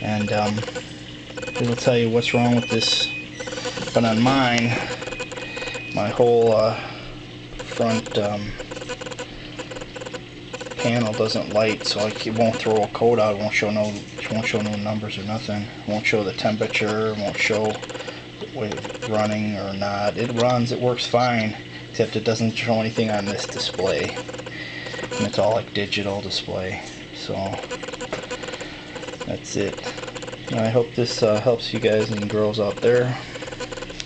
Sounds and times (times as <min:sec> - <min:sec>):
Speech: 0:01.6 - 0:03.1, 0:10.8 - 0:17.8, 0:18.5 - 0:24.2, 0:25.2 - 0:27.6, 0:29.3 - 0:29.8, 0:30.5 - 0:33.2.